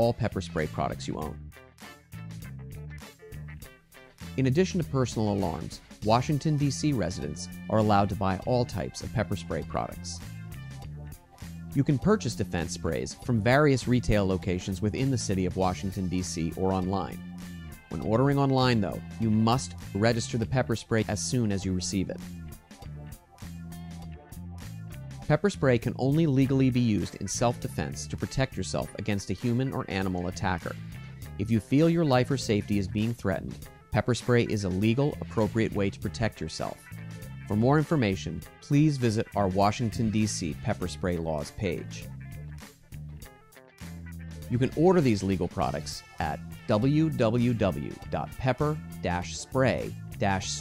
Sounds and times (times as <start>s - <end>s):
Speech: 0.0s - 1.4s, 4.4s - 10.2s, 11.8s - 17.2s, 17.9s - 22.2s, 25.3s - 30.8s, 31.4s - 36.9s, 37.5s - 42.1s, 44.5s - 50.6s
Music: 0.0s - 50.6s.